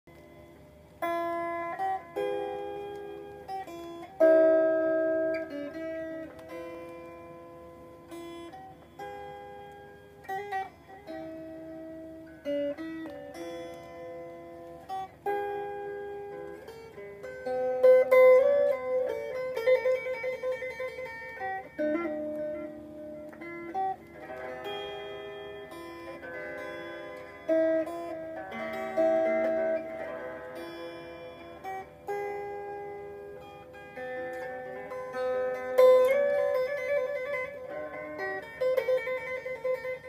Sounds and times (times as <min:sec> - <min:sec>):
Guitar: 0:00.0 - 0:40.0
Inside, small room: 0:00.0 - 0:40.0.